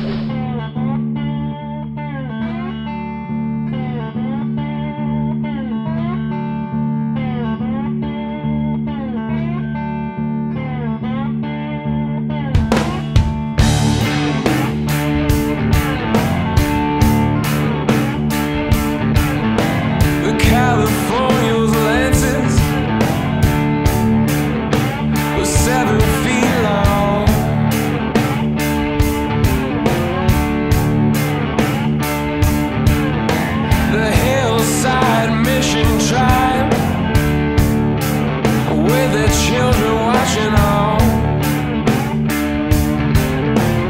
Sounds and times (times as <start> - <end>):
Music: 0.0 - 43.8.